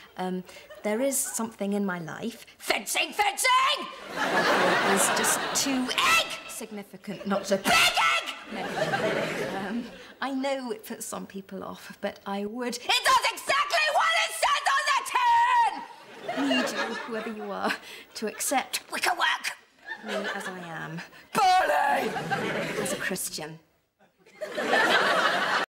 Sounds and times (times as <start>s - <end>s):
Speech: 4.5s - 23.6s.